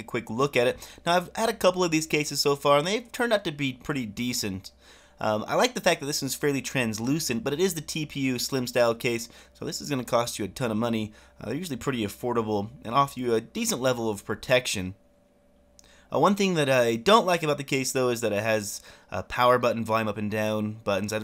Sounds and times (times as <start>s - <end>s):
Speech: 0.0s - 15.0s, 16.1s - 21.2s.